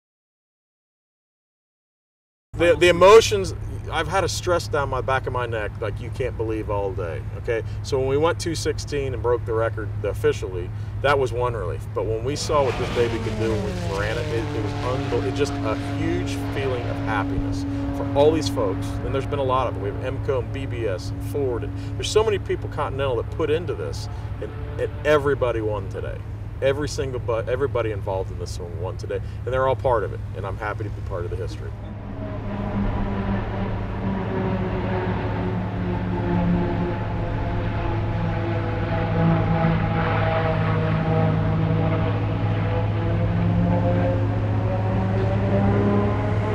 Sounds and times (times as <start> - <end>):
Speech: 2.6 - 31.7.